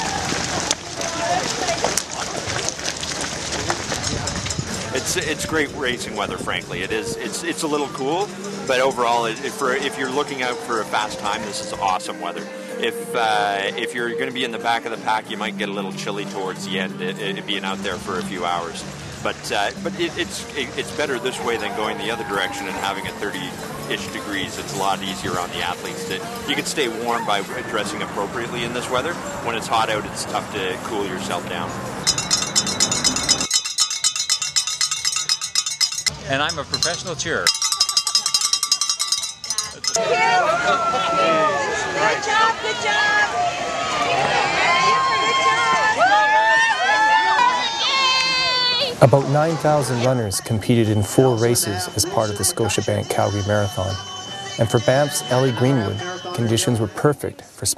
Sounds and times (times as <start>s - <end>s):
Outside, urban or manmade: 0.0s - 57.7s
Music: 4.0s - 40.0s, 49.0s - 57.7s
Speech: 4.9s - 31.7s, 49.0s - 54.0s, 54.6s - 57.7s.